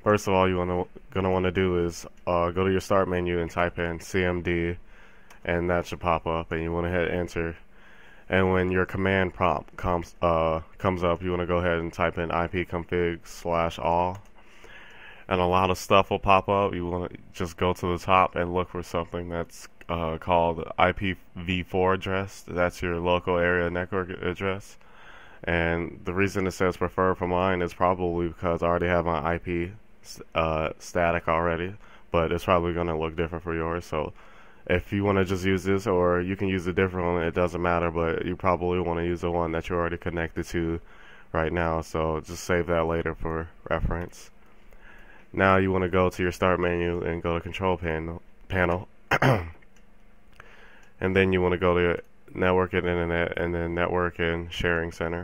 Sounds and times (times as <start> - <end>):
Speech: 0.0 - 4.8, 5.4 - 7.6, 8.3 - 14.3, 15.2 - 44.4, 45.3 - 49.6, 50.9 - 55.2.